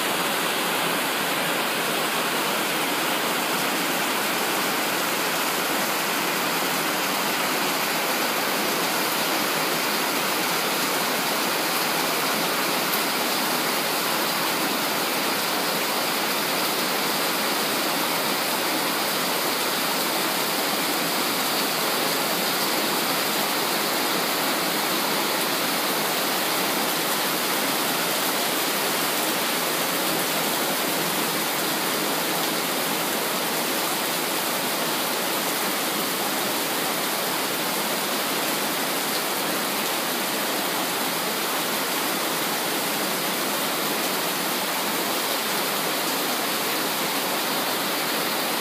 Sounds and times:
Rain on surface: 0.0s - 48.6s.

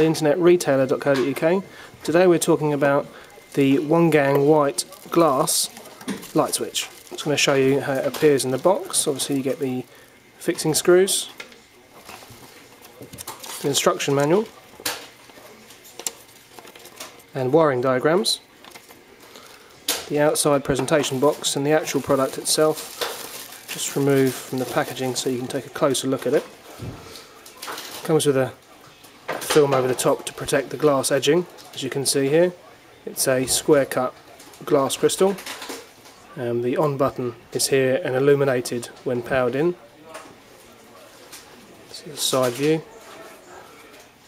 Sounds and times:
Speech: 0.0s - 12.0s, 12.9s - 14.8s, 17.2s - 18.5s, 20.1s - 22.9s, 23.7s - 26.5s, 28.0s - 35.4s, 36.2s - 44.1s.

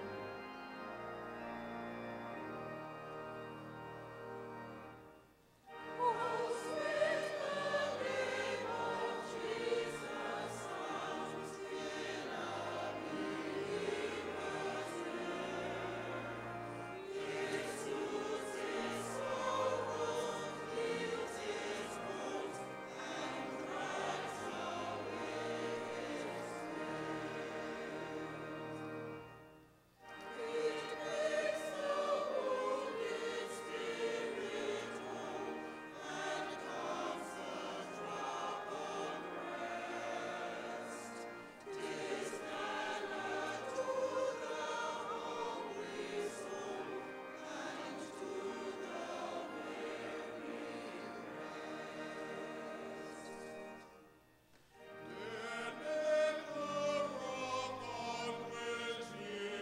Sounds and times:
Music: 0.0s - 59.6s.

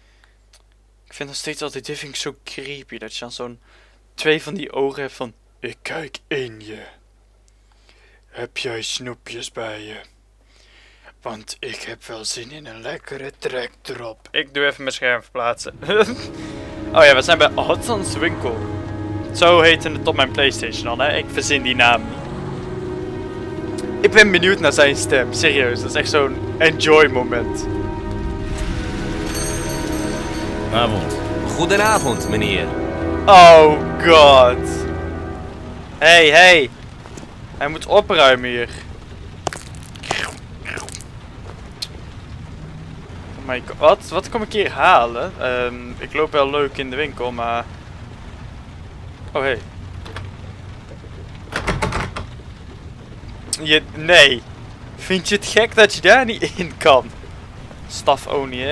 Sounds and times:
Speech: 1.1s - 3.6s, 4.2s - 7.0s, 8.3s - 10.1s, 11.2s - 16.2s, 17.0s - 18.6s, 19.4s - 22.0s, 24.0s - 27.6s, 30.7s - 32.7s, 33.3s - 34.8s, 36.0s - 36.7s, 37.6s - 38.9s, 43.4s - 47.7s, 49.3s - 49.7s, 53.6s - 54.4s, 55.0s - 57.1s, 57.9s - 58.7s
Music: 15.8s - 36.3s.

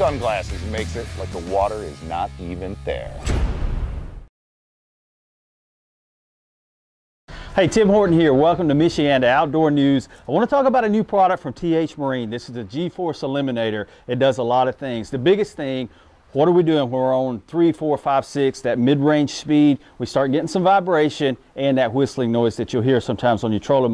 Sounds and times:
Speech: 0.0s - 3.3s, 7.6s - 23.9s.

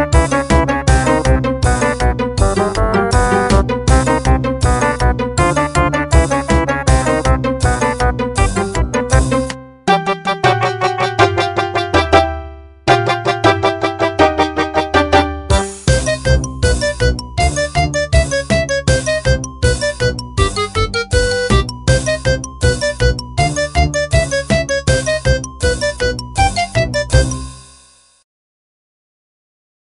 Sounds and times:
Rhythm and blues: 0.0s - 27.5s
Jingle (music): 0.0s - 28.2s.

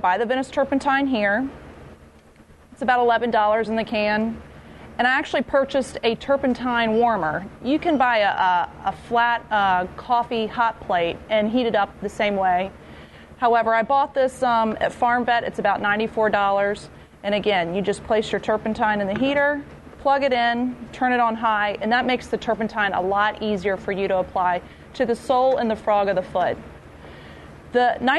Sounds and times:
Speech: 0.0s - 1.6s, 2.8s - 4.4s, 5.0s - 12.7s, 13.4s - 26.6s, 27.7s - 28.1s.

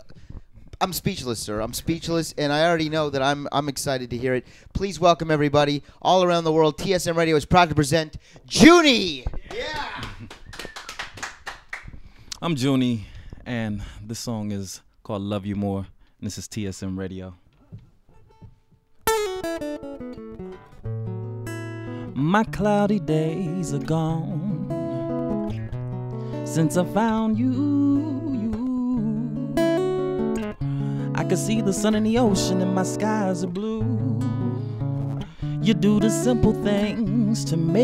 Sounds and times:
Music: 18.1s - 37.8s.

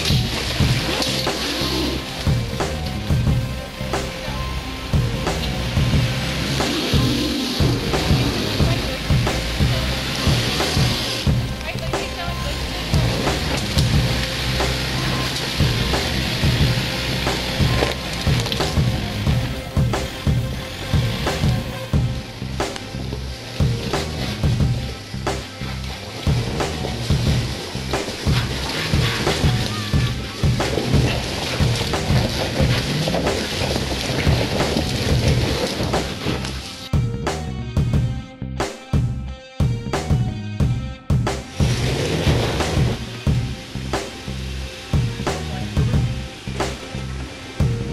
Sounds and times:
Music: 0.0s - 47.9s.

